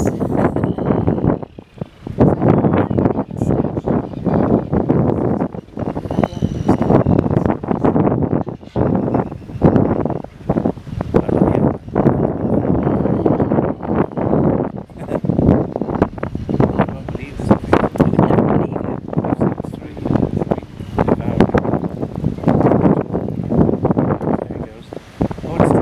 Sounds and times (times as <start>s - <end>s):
Speech: 0.0s - 0.8s, 2.2s - 7.9s, 11.2s - 11.7s, 16.9s - 21.6s, 24.3s - 25.8s
Wind: 0.0s - 25.8s.